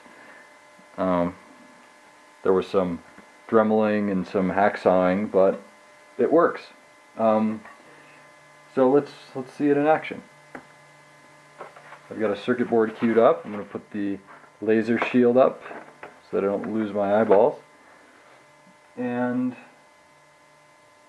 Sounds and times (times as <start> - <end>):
Speech: 1.0 - 1.4, 2.4 - 7.7, 8.7 - 10.3, 12.1 - 17.6, 19.0 - 19.8.